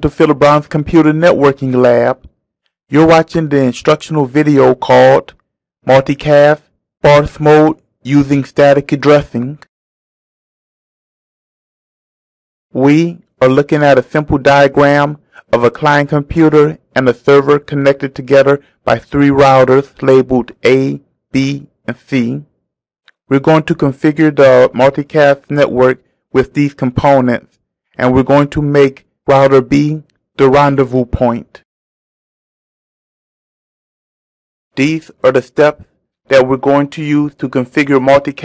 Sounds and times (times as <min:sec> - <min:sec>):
Speech: 0:00.0 - 0:02.3, 0:02.9 - 0:09.7, 0:12.8 - 0:22.5, 0:23.2 - 0:31.7, 0:34.8 - 0:38.4.